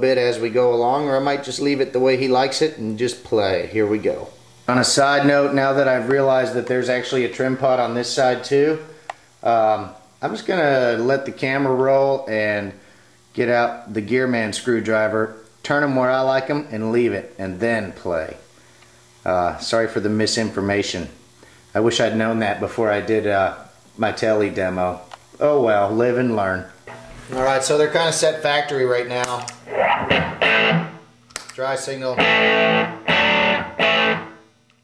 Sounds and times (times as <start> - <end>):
Guitar: 0.0 - 12.5, 13.4 - 34.8
Speech: 0.0 - 12.8, 13.4 - 18.5, 19.2 - 29.5, 31.6 - 32.3
Effects unit: 29.6 - 31.2, 32.1 - 34.8.